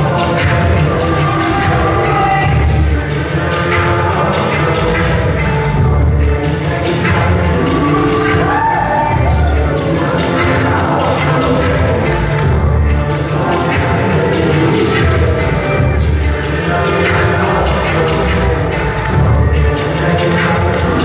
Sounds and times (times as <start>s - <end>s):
Music: 0.0s - 21.0s.